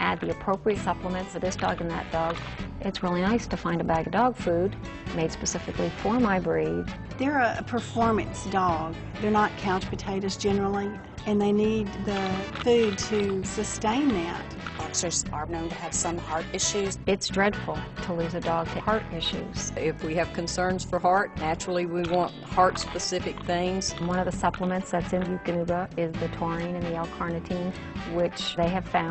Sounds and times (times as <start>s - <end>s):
Music: 0.0s - 29.1s
Speech: 0.0s - 29.1s.